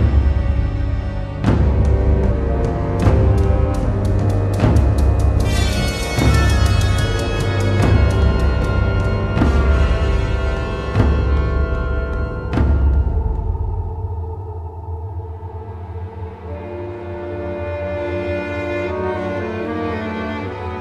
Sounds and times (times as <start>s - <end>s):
Music: 0.0s - 20.8s.